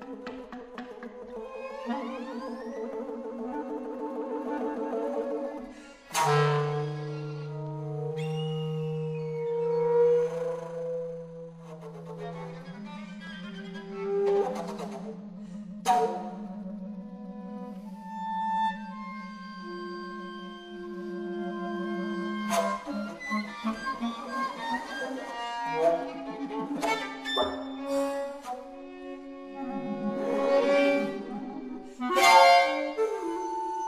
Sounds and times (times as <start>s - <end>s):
Bowed string instrument: 0.0s - 33.8s.